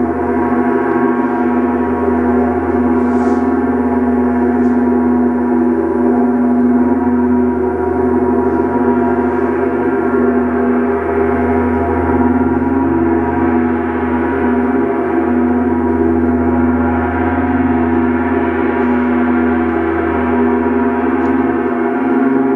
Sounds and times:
Music: 0.0 - 22.5.

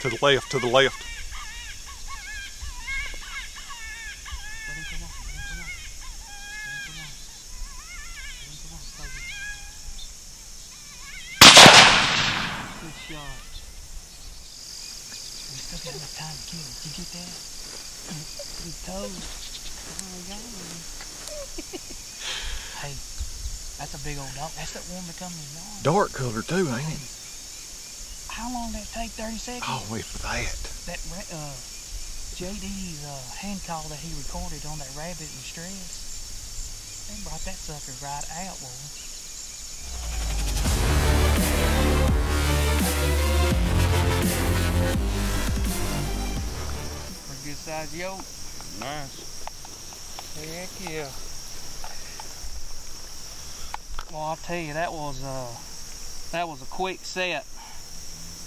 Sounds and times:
Insect: 0.0 - 58.4
Outside, rural or natural: 0.0 - 58.4.

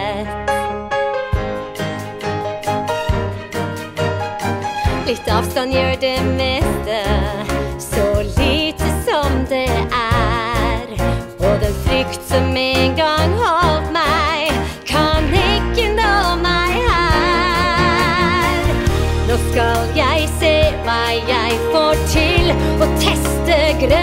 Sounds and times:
Music: 0.0 - 24.0.

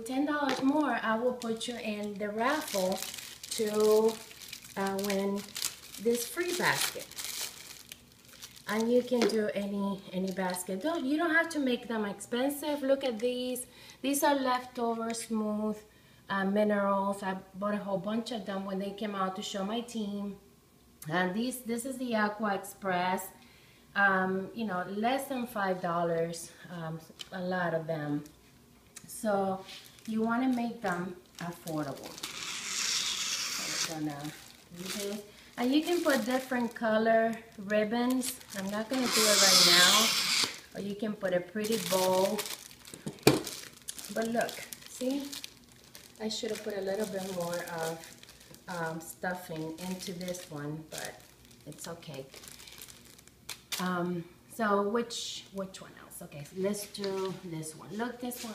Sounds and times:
Speech: 0.0 - 7.1, 8.7 - 20.4, 21.0 - 23.4, 24.0 - 28.3, 29.1 - 32.1, 33.6 - 42.5, 44.1 - 45.4, 46.2 - 48.1, 48.7 - 52.4, 53.8 - 58.5
Inside, small room: 0.0 - 58.5.

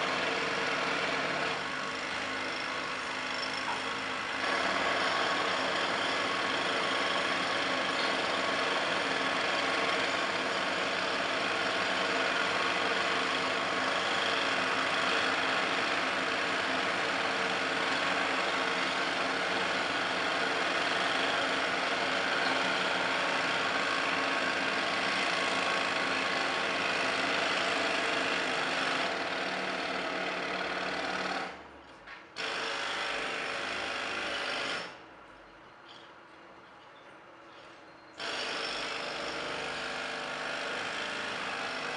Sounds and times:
Tools: 2.5 - 3.9, 7.5 - 8.3, 22.4 - 22.8, 35.6 - 39.5.

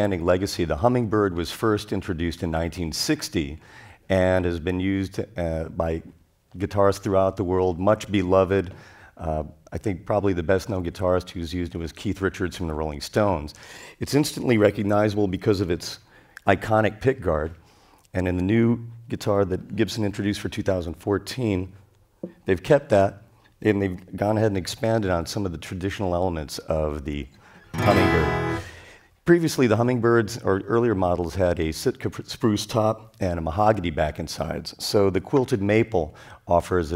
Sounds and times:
Speech: 0.0 - 21.8, 22.4 - 28.6, 29.2 - 36.9.

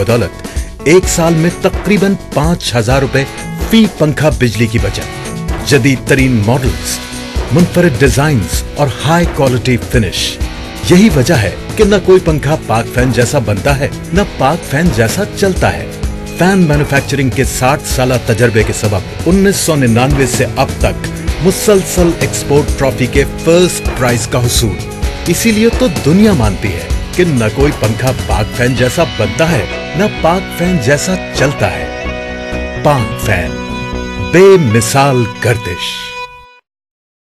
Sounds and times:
Speech: 0.0 - 5.1, 5.7 - 31.9, 32.8 - 33.6, 34.3 - 36.1
Music: 0.0 - 36.7.

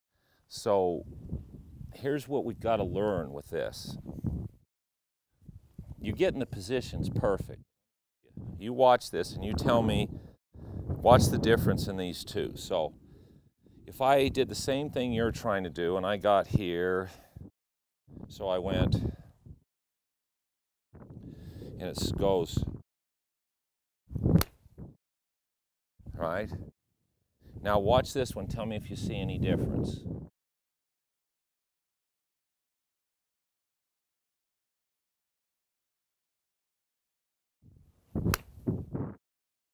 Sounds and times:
Speech: 0.5 - 1.1, 1.9 - 4.0, 6.0 - 7.6, 8.6 - 10.2, 11.0 - 13.0, 13.9 - 17.3, 18.3 - 19.2, 21.8 - 22.8, 26.1 - 26.6, 27.6 - 30.0.

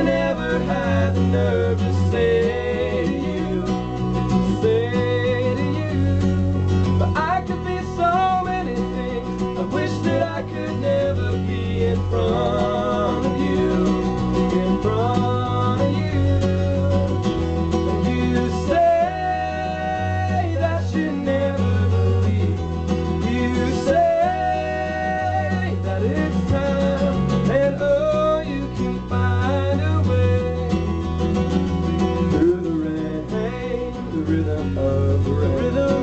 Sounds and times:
Music: 0.0 - 36.0.

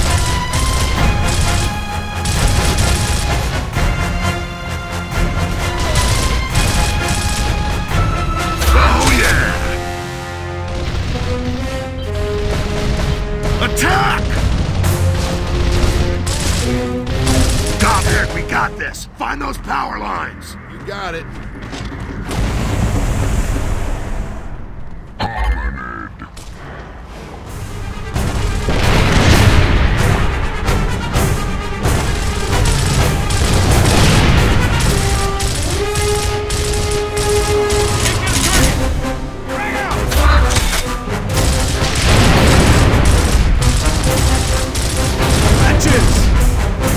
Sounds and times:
Speech: 17.8 - 21.3.

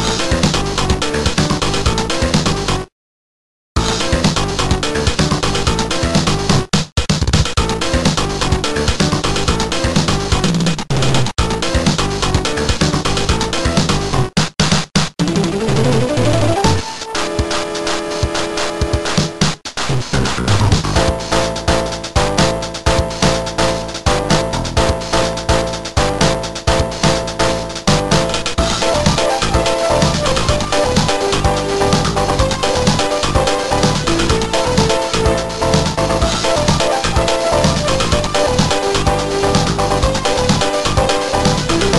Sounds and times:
Exciting music: 15.2 - 41.9.

